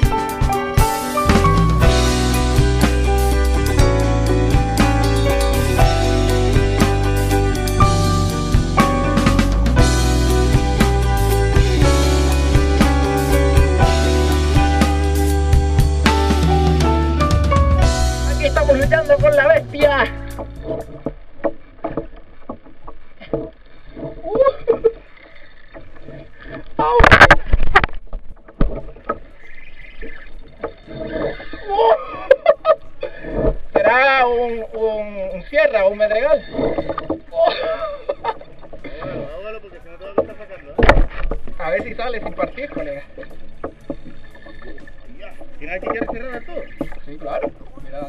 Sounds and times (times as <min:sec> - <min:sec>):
Music: 0:00.0 - 0:21.0.